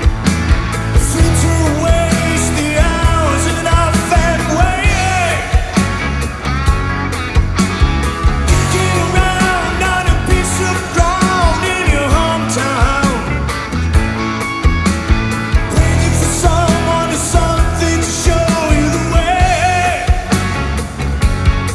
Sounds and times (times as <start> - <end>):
Independent music: 0.0 - 21.7
Singing: 1.0 - 6.0, 8.5 - 13.4, 15.7 - 20.4.